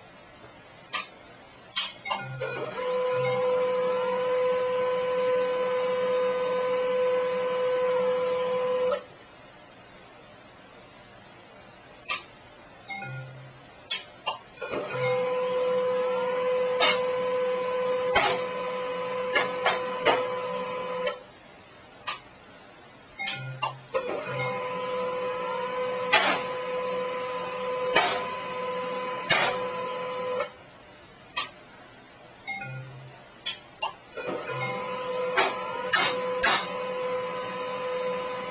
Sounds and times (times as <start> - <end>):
Printer: 1.8 - 9.1, 14.6 - 21.3, 23.3 - 30.6, 34.1 - 38.5.